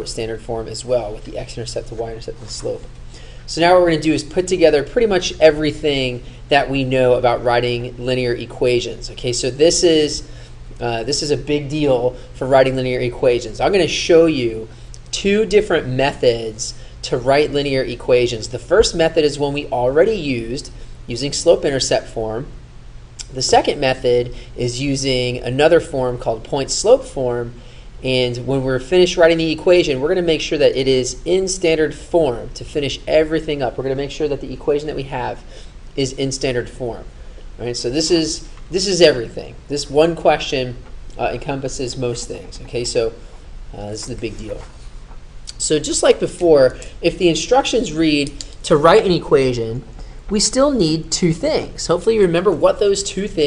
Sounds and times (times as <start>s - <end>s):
Speech: 0.0s - 2.9s, 3.5s - 22.5s, 23.2s - 44.7s, 45.5s - 53.4s.